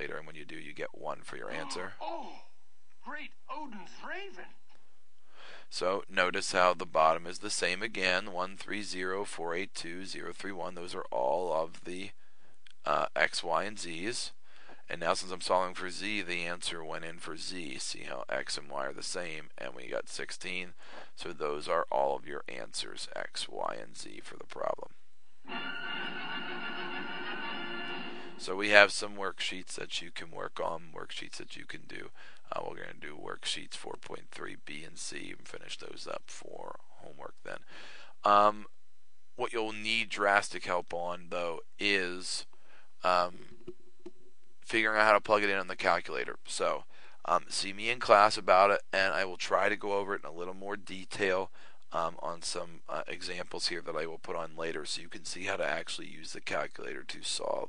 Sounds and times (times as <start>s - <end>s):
Speech: 0.0s - 4.6s, 5.6s - 12.2s, 12.8s - 24.9s, 28.4s - 38.7s, 39.4s - 43.4s, 44.6s - 57.6s
Music: 25.5s - 28.4s.